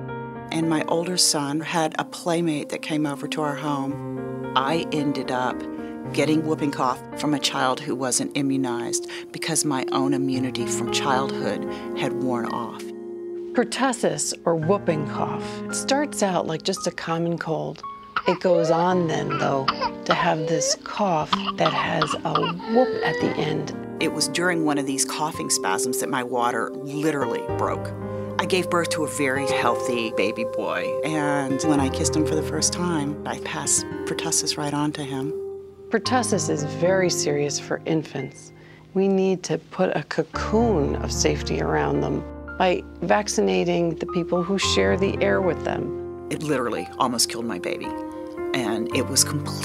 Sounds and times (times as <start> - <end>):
Music: 0.0 - 49.6
Speech: 0.5 - 4.0, 4.6 - 12.9, 13.6 - 35.3, 35.9 - 47.9, 48.5 - 49.6.